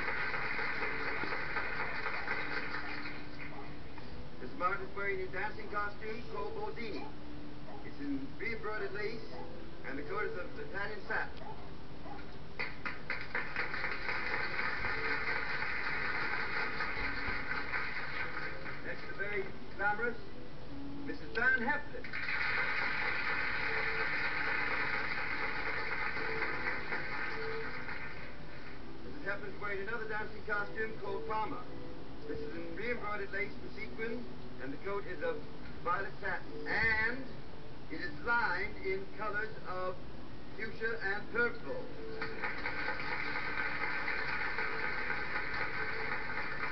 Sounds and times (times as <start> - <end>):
Music: 0.0 - 46.7.